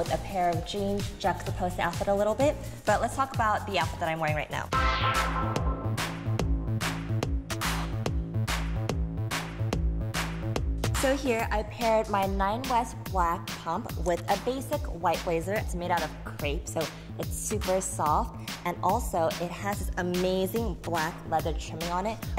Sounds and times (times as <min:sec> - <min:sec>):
Speech: 0:00.0 - 0:04.7, 0:11.0 - 0:22.3
Music: 0:00.0 - 0:22.3.